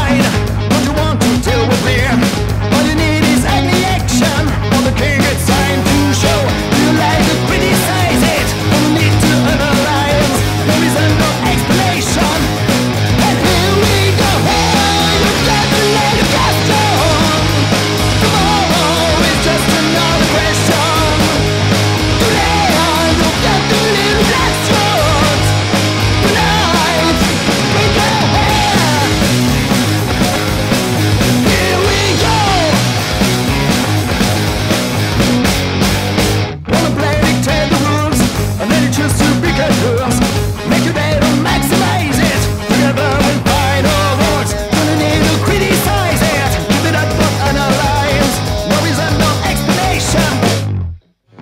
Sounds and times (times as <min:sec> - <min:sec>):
Exciting music: 0:00.0 - 0:37.0.